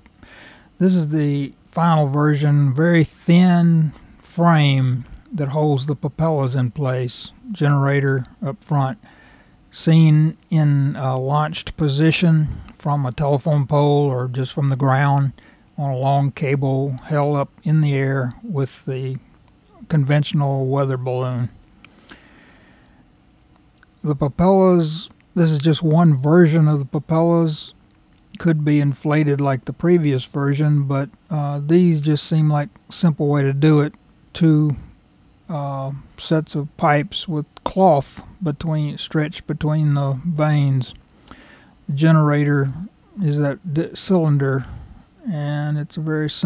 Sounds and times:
Speech: 0:00.8 - 0:09.1, 0:09.7 - 0:21.6, 0:23.9 - 0:41.0, 0:41.9 - 0:46.4.

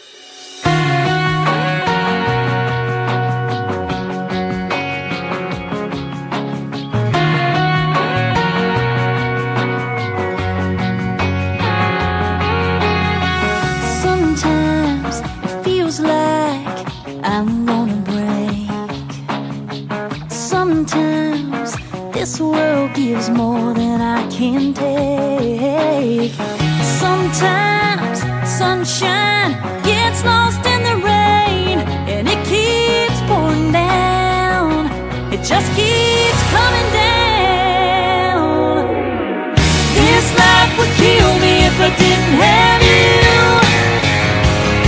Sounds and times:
Music: 0:00.0 - 0:44.8.

